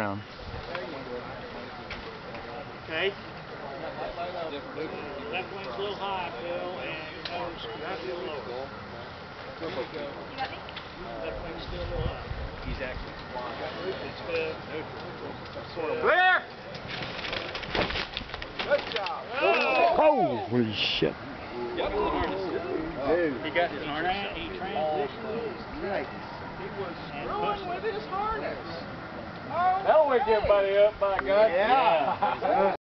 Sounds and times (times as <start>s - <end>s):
Wind: 0.0s - 32.8s.